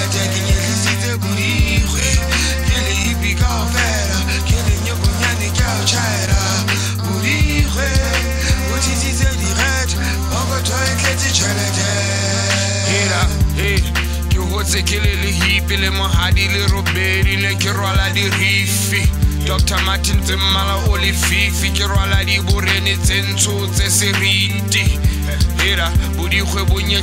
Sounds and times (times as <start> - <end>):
Music: 0.0 - 27.0.